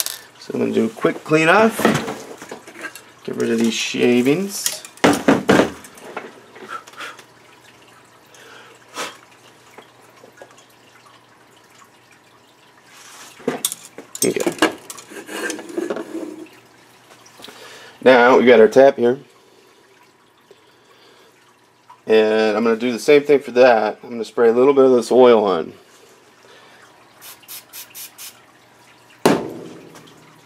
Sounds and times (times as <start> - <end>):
Speech: 0.4 - 1.8, 3.2 - 4.8, 18.0 - 19.3, 22.1 - 25.8.